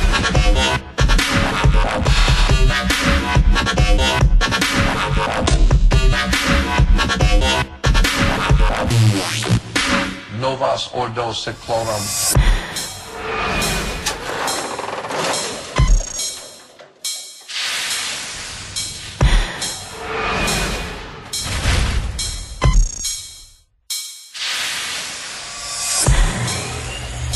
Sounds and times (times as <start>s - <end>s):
Music: 0.0s - 24.5s, 25.6s - 27.3s.